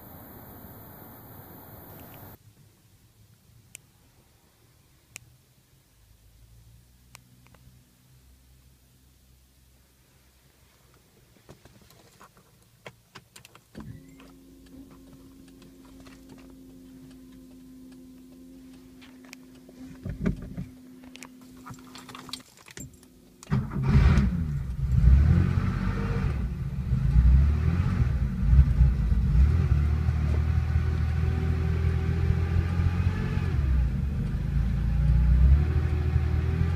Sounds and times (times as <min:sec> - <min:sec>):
Vehicle: 0:00.0 - 0:36.7.